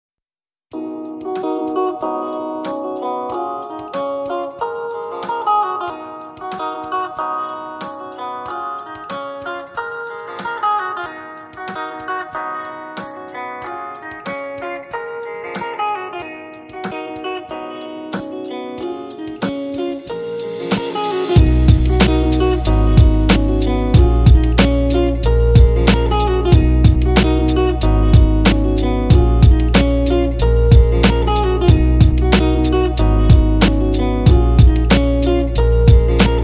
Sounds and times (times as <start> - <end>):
Music: 0.7 - 36.4.